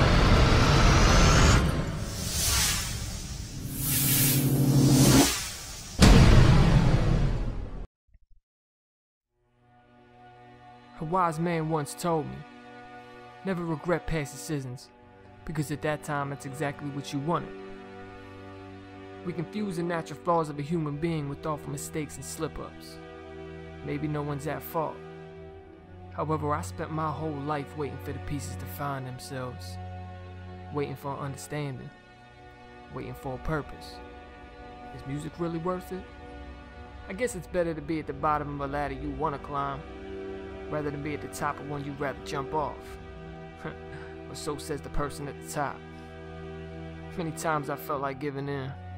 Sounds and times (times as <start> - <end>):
Music: 0.0 - 7.9, 9.3 - 48.9
Speech: 11.0 - 12.5, 13.4 - 17.5, 19.2 - 23.0, 23.8 - 25.0, 26.2 - 29.8, 30.7 - 31.9, 32.9 - 34.0, 34.9 - 36.0, 37.1 - 39.8, 40.7 - 43.0, 43.6 - 45.8, 47.1 - 48.8.